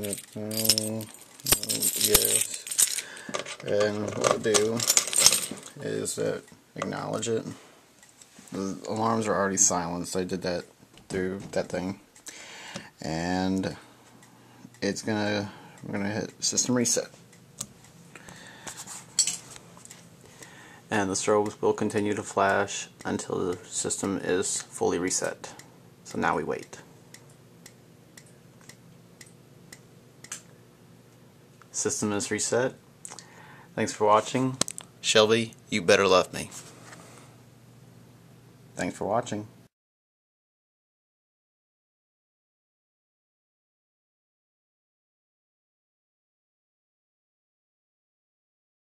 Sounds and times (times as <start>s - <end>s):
Speech: 0.0s - 2.7s, 3.6s - 4.9s, 5.8s - 7.6s, 8.5s - 12.0s, 13.0s - 13.8s, 14.8s - 17.2s, 20.9s - 26.9s, 31.7s - 32.8s, 33.8s - 36.6s, 38.8s - 39.6s.